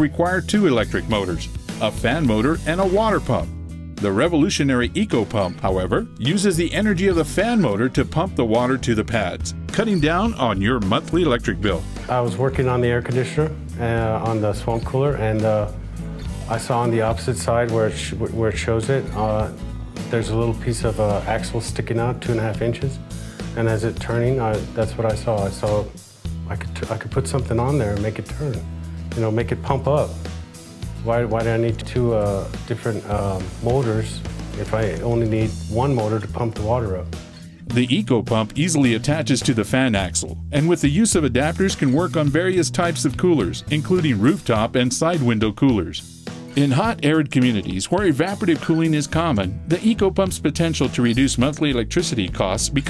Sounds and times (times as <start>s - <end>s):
Speech: 0.0s - 15.8s, 16.4s - 23.0s, 23.6s - 28.6s, 29.2s - 30.2s, 31.0s - 37.1s, 37.7s - 46.0s, 46.6s - 52.8s
Music: 0.0s - 52.8s.